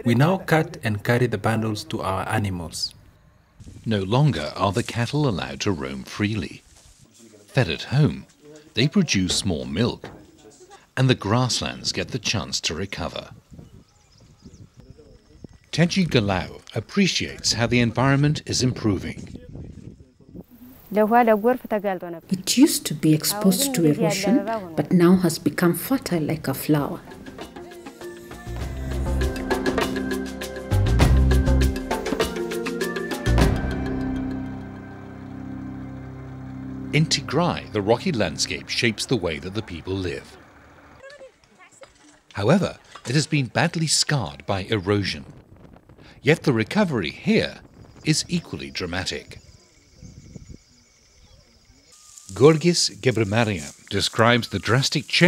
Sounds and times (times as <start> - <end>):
Speech: 0.0 - 3.0, 3.9 - 13.4, 20.9 - 27.0, 37.0 - 40.4, 42.4 - 45.3, 46.2 - 49.4, 52.3 - 55.2.